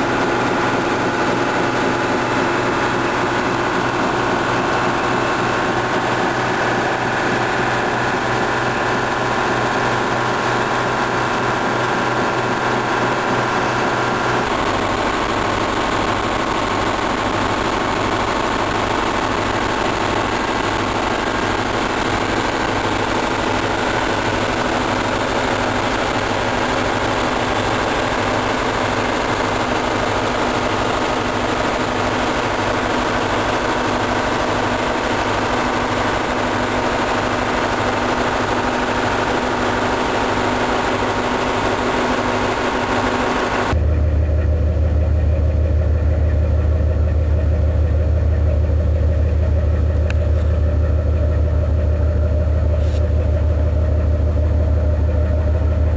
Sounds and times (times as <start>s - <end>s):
Heavy engine (low frequency): 0.0s - 55.9s
Idling: 0.0s - 55.9s.